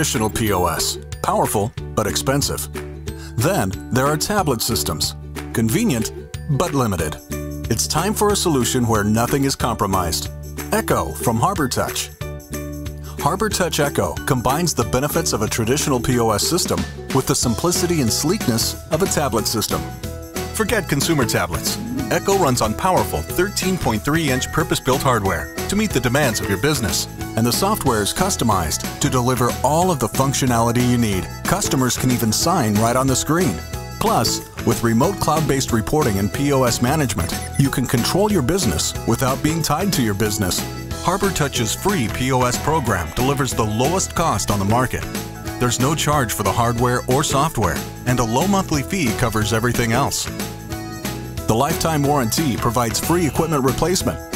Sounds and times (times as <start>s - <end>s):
Speech: 0.0s - 2.7s, 3.4s - 12.1s, 13.2s - 19.9s, 20.6s - 50.3s, 51.5s - 54.2s
Music: 0.0s - 54.3s.